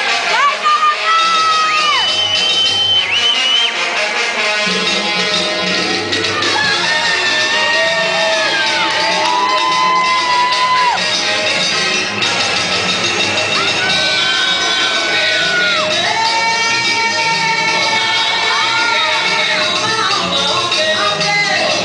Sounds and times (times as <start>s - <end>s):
Inside, large room or hall: 0.0s - 21.8s
Music: 0.0s - 21.8s
Shout: 0.2s - 2.1s, 6.4s - 11.1s, 13.6s - 19.8s.